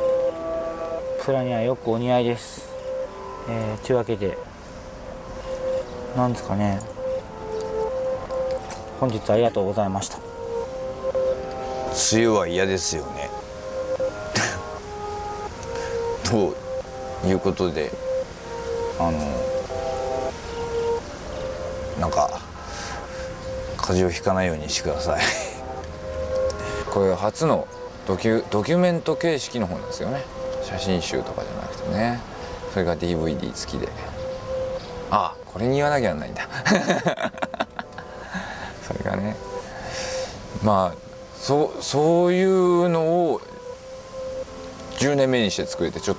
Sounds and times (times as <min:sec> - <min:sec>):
Narration, monologue: 0:00.0 - 0:46.1.